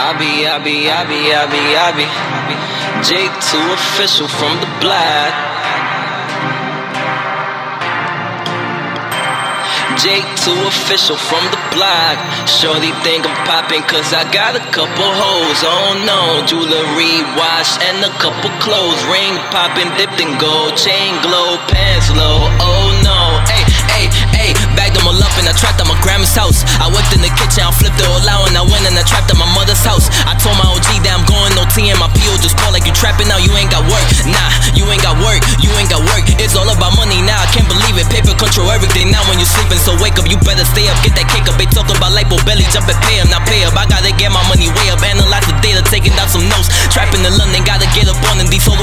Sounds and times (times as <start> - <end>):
House music: 0.0 - 48.8.